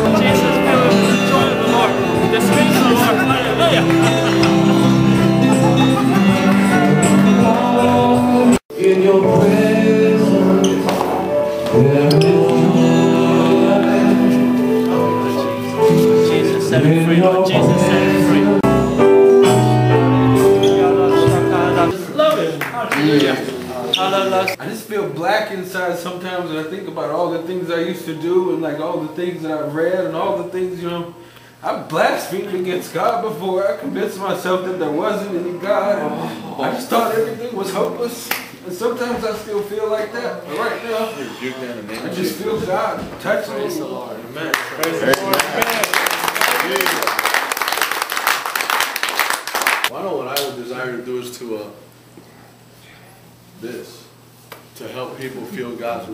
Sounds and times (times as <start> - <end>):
Speech: 0.0 - 4.1, 20.8 - 47.1, 49.9 - 51.9, 54.8 - 56.1
Music: 0.0 - 22.0.